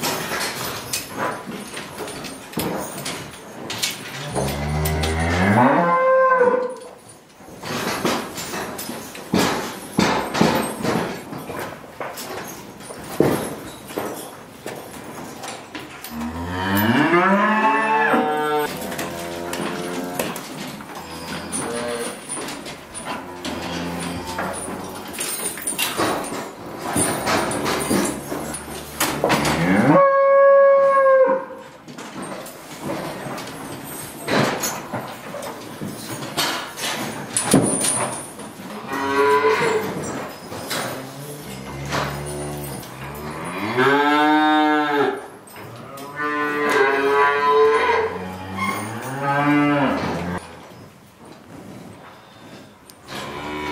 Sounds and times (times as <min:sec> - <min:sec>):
Moo: 0:04.2 - 0:06.8, 0:16.1 - 0:20.4, 0:21.0 - 0:22.2, 0:23.1 - 0:25.0, 0:28.6 - 0:31.6, 0:38.8 - 0:39.9, 0:41.0 - 0:50.5, 0:53.1 - 0:53.7.